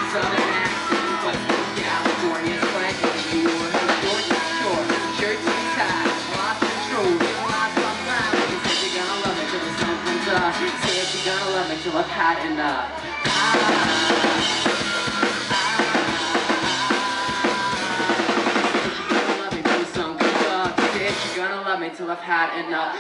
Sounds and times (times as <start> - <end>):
Music: 0.0 - 21.9.